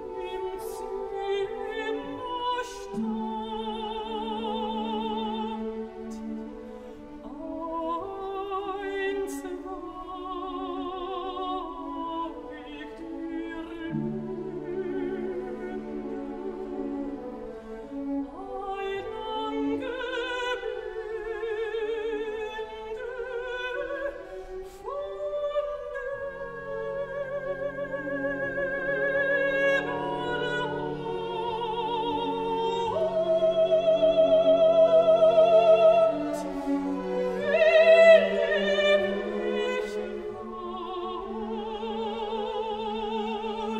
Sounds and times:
Music: 0.0s - 43.7s.

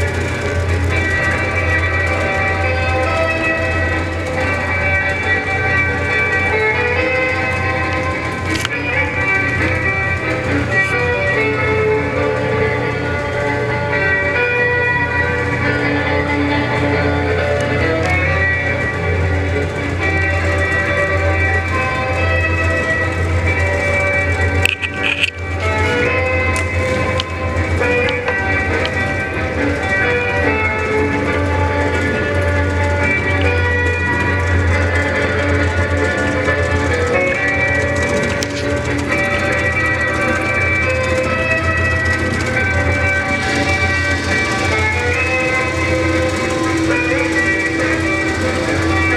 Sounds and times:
Music: 0.0s - 49.1s
Clip-clop: 17.6s - 49.1s.

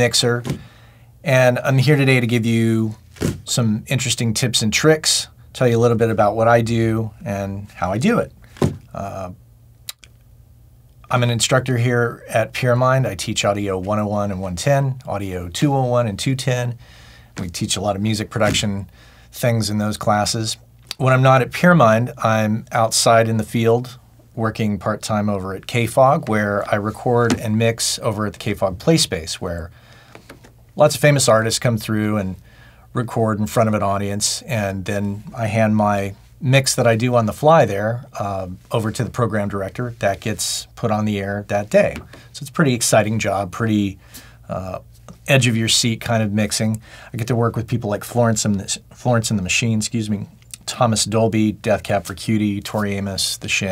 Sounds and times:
Speech: 0.0s - 0.6s, 1.2s - 10.0s, 11.1s - 16.8s, 17.4s - 29.8s, 30.8s - 32.4s, 33.0s - 53.7s.

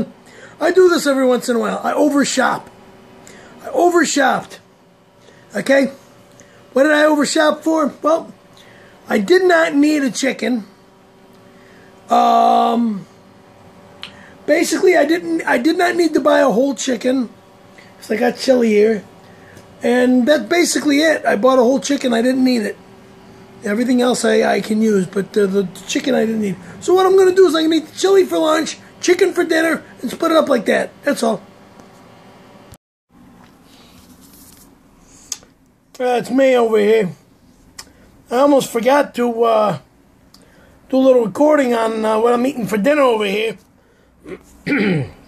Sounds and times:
Speech: 0.0s - 2.7s, 3.6s - 4.7s, 5.5s - 6.0s, 6.8s - 8.4s, 9.1s - 10.8s, 12.1s - 13.1s, 14.5s - 17.4s, 18.0s - 19.1s, 19.8s - 22.8s, 23.6s - 31.5s, 36.0s - 37.2s, 38.3s - 39.9s, 40.9s - 43.7s.

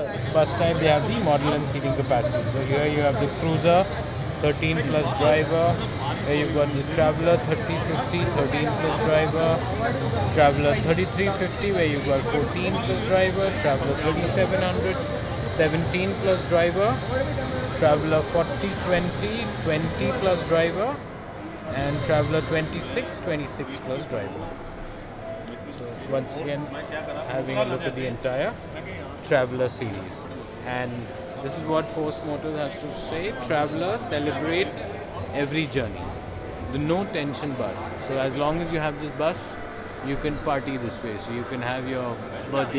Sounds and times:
Speech: 0.0s - 21.0s, 21.7s - 24.5s, 25.5s - 36.1s, 36.7s - 42.7s.

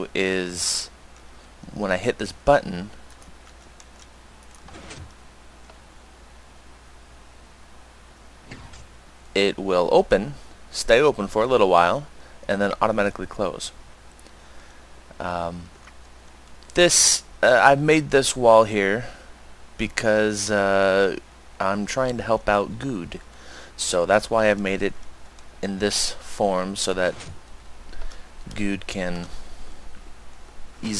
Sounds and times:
Speech: 0.0s - 0.9s, 1.7s - 2.9s, 9.4s - 13.7s, 15.2s - 15.7s, 16.8s - 19.1s, 19.8s - 23.2s, 23.8s - 25.0s, 25.6s - 27.2s, 28.5s - 29.3s.

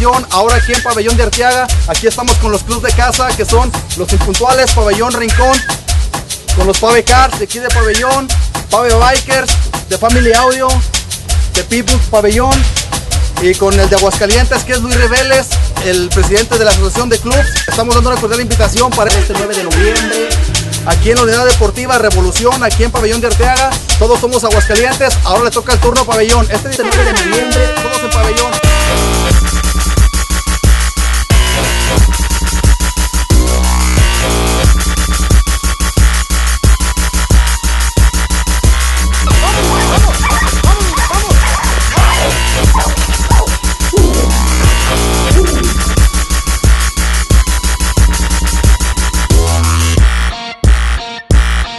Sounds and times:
Speech: 0.0s - 5.6s, 6.6s - 10.8s, 11.6s - 12.7s, 13.4s - 20.1s, 20.9s - 28.7s, 40.6s - 41.4s
Music: 0.0s - 51.7s.

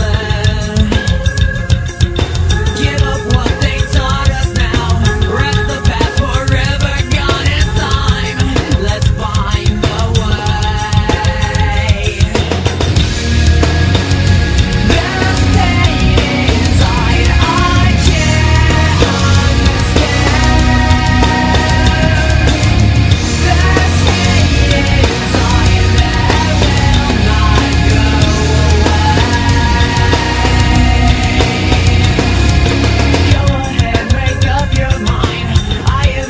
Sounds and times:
Music: 0.0s - 36.3s.

